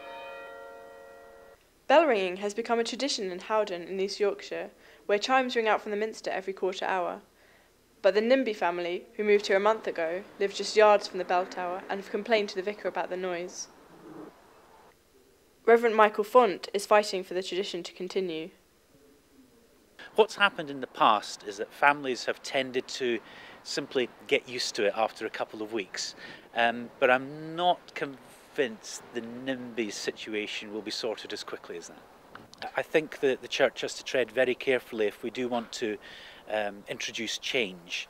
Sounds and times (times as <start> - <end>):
Speech: 1.9 - 7.3, 8.0 - 13.7, 15.7 - 18.6, 20.1 - 32.0, 32.6 - 38.0.